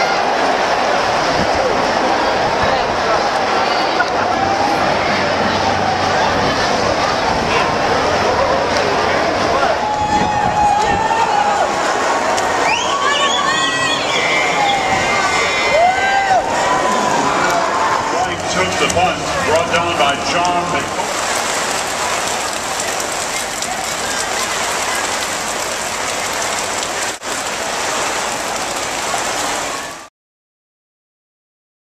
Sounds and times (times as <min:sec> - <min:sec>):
Rain on surface: 0:00.0 - 0:30.1.